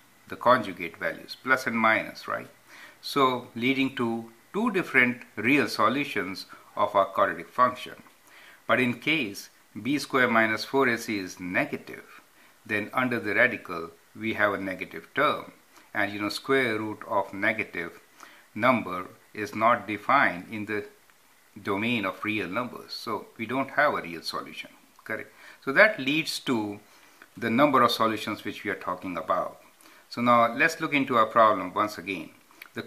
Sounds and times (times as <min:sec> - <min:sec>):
Speech: 0:00.3 - 0:08.1, 0:08.7 - 0:21.0, 0:21.6 - 0:32.8.